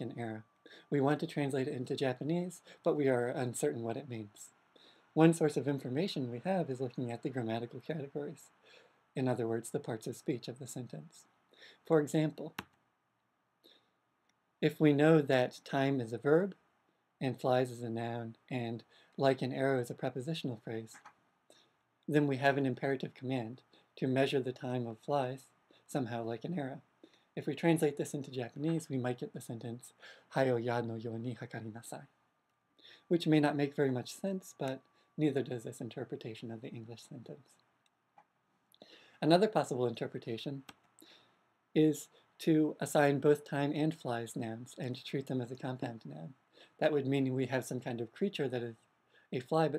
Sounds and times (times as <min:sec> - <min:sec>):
Male speech, man speaking: 0:00.0 - 0:04.5, 0:05.2 - 0:08.5, 0:09.2 - 0:11.2, 0:11.9 - 0:12.6, 0:14.6 - 0:16.6, 0:17.2 - 0:21.0, 0:22.1 - 0:26.8, 0:27.4 - 0:32.1, 0:33.1 - 0:37.4, 0:39.2 - 0:40.7, 0:41.8 - 0:48.8, 0:49.4 - 0:49.7
Narration, monologue: 0:00.0 - 0:49.7.